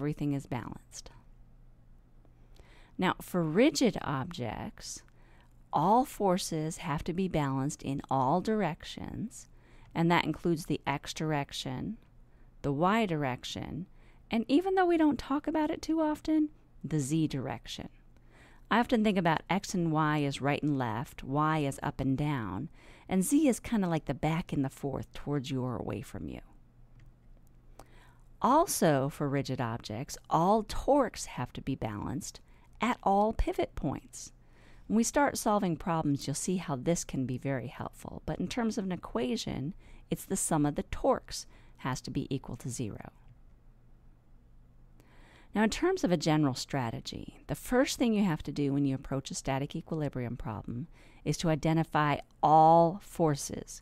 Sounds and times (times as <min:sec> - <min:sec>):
Speech: 0:00.0 - 0:01.2, 0:03.0 - 0:05.1, 0:05.8 - 0:12.0, 0:12.6 - 0:18.0, 0:18.7 - 0:26.6, 0:28.4 - 0:34.3, 0:34.9 - 0:43.2, 0:45.6 - 0:53.8.